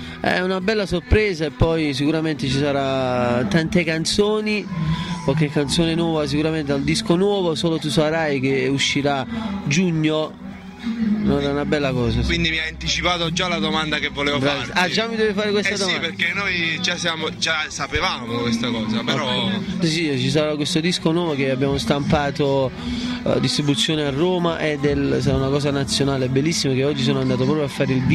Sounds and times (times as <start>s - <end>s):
Music: 0.0s - 28.1s
Speech: 11.3s - 22.7s.